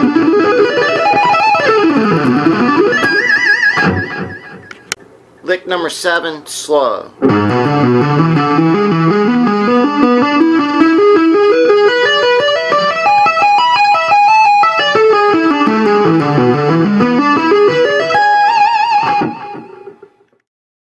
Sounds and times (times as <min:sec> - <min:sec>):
Tapping (guitar technique): 0:00.0 - 0:05.0, 0:07.2 - 0:20.1.